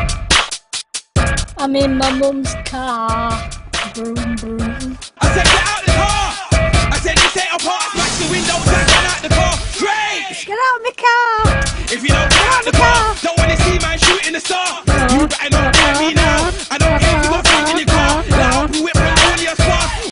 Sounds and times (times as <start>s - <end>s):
Music: 0.0s - 10.5s, 11.4s - 20.1s.